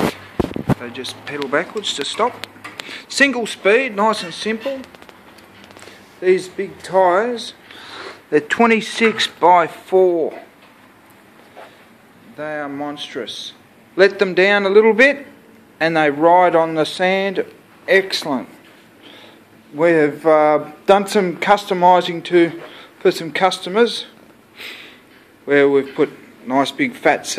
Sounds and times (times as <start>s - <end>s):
Speech: 0.8s - 2.4s, 3.1s - 4.9s, 6.2s - 7.6s, 8.3s - 10.6s, 12.3s - 18.6s, 19.7s - 24.2s, 25.4s - 27.3s.